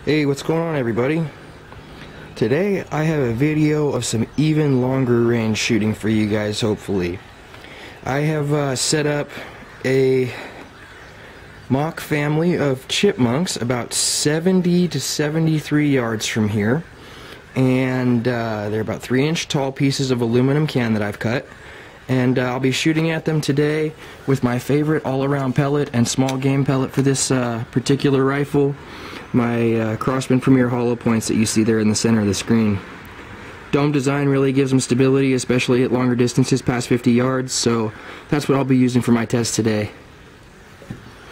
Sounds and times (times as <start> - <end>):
Speech: 0.0 - 1.4, 2.4 - 7.3, 8.0 - 10.7, 11.7 - 16.9, 17.5 - 32.9, 33.7 - 40.0.